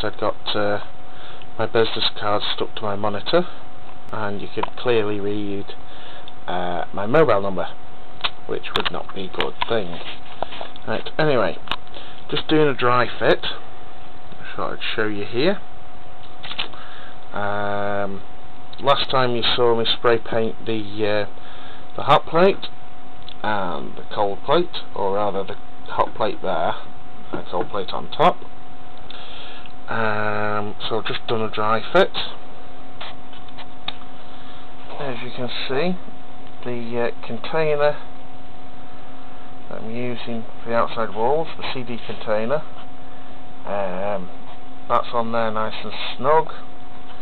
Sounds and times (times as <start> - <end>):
Speech: 0.0 - 0.9, 1.6 - 5.8, 6.5 - 7.8, 8.4 - 10.1, 10.8 - 11.7, 12.3 - 13.7, 14.4 - 15.7, 17.3 - 21.4, 22.0 - 28.5, 29.9 - 32.4, 34.9 - 38.1, 39.7 - 42.7, 43.6 - 46.7.